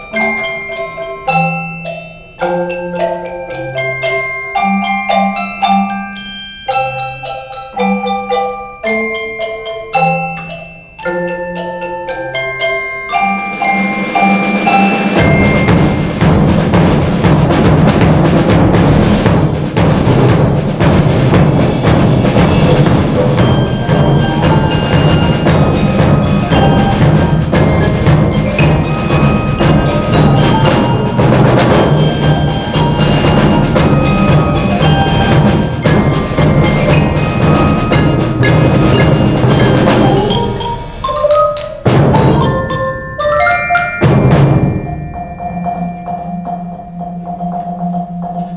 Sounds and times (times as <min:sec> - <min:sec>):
Tubular bells: 0:00.0 - 0:48.5
Wood block: 0:00.0 - 0:48.5.